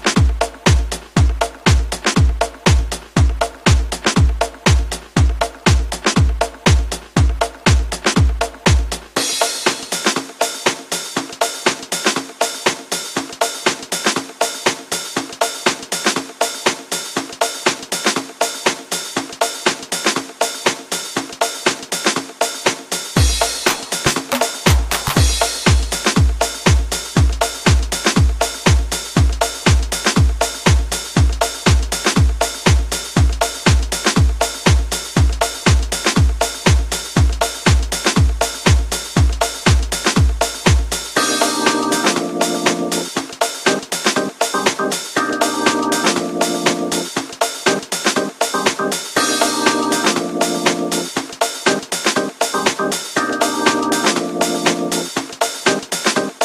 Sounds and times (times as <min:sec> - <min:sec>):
Music: 0:00.0 - 0:56.4.